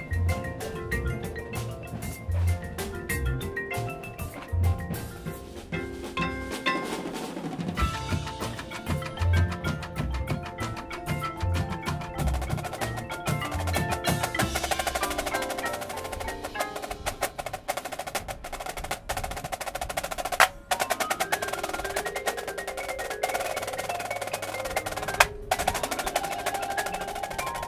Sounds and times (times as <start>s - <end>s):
Percussion: 0.0s - 27.6s.